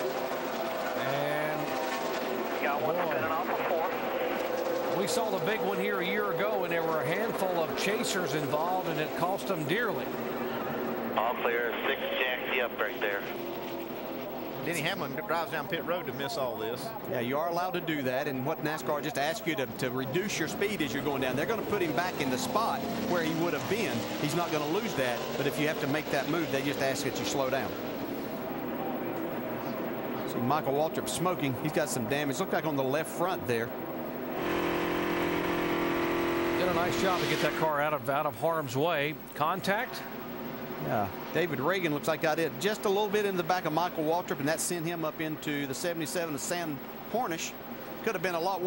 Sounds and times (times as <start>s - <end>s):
Speech: 1.0s - 1.8s, 2.6s - 4.0s, 4.9s - 10.1s, 11.2s - 13.4s, 14.6s - 27.8s, 30.3s - 33.7s, 36.6s - 40.1s, 40.8s - 48.6s.